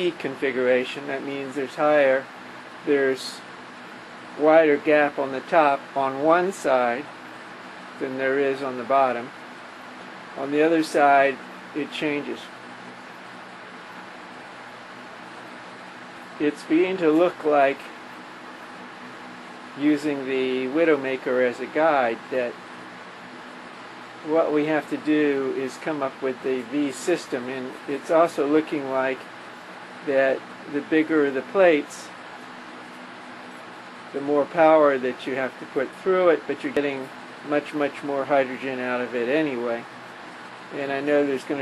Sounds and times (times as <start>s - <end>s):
Speech: 0.0s - 3.5s, 4.4s - 7.1s, 8.0s - 9.4s, 10.4s - 12.6s, 16.4s - 18.0s, 19.8s - 22.6s, 24.2s - 29.3s, 30.0s - 32.2s, 34.1s - 39.9s, 40.7s - 41.6s.